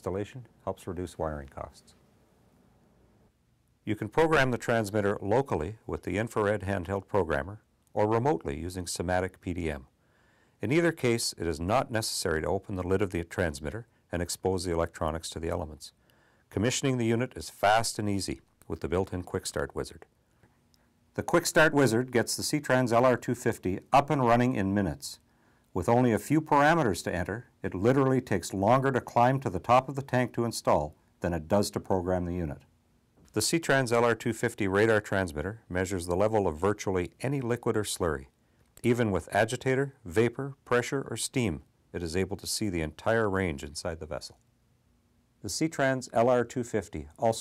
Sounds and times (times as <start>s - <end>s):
Speech: 0.0s - 2.0s, 3.8s - 9.9s, 10.6s - 20.1s, 21.2s - 32.7s, 33.3s - 44.4s, 45.4s - 47.4s.